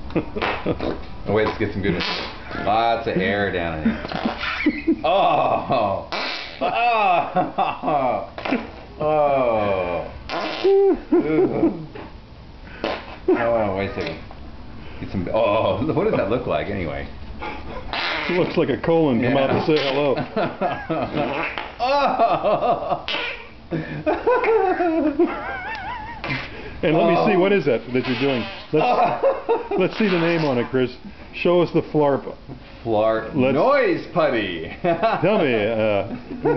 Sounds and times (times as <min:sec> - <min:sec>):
Speech: 0:26.8 - 0:28.5, 0:29.8 - 0:36.1.